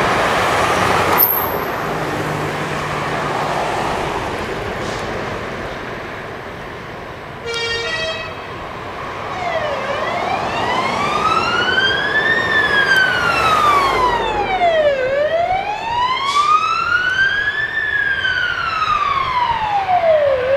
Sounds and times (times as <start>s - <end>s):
Truck: 0.0s - 20.5s
Fire engine, fire truck (siren): 7.4s - 20.5s.